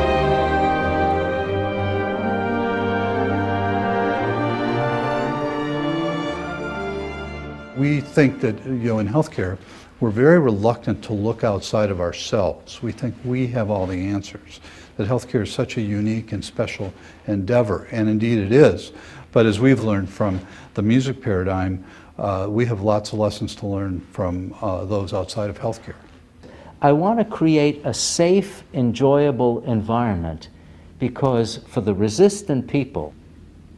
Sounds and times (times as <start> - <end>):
Speech: 7.8 - 26.1, 26.8 - 33.2.